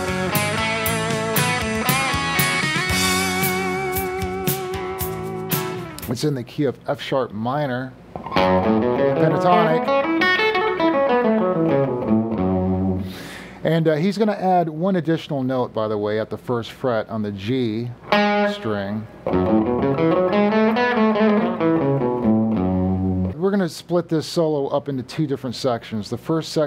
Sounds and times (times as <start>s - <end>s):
Electric guitar: 0.0s - 6.1s, 8.1s - 13.6s, 18.0s - 23.4s
Speech: 6.1s - 8.0s, 9.1s - 9.9s, 13.6s - 19.1s, 23.4s - 26.6s.